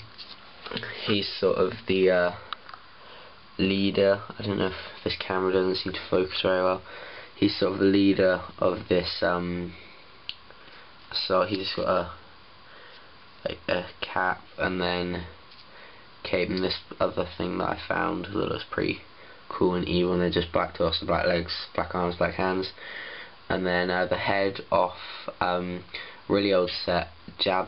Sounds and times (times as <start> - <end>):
Speech: 0.7 - 2.5, 3.6 - 9.8, 11.1 - 12.2, 13.4 - 15.4, 16.2 - 22.8, 23.5 - 27.6.